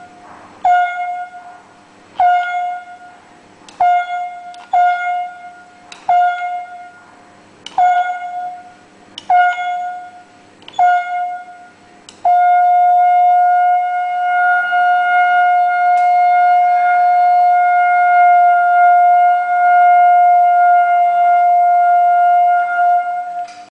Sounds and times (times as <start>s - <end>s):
French horn: 10.8s - 23.7s.